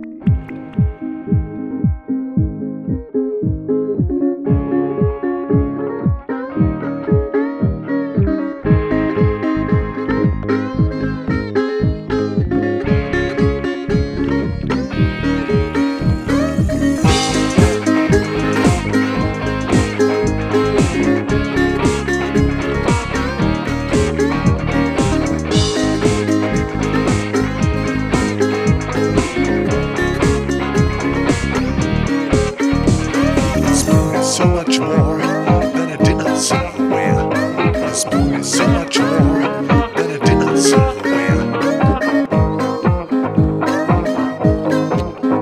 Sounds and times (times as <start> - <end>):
Guitar: 0.0 - 45.4.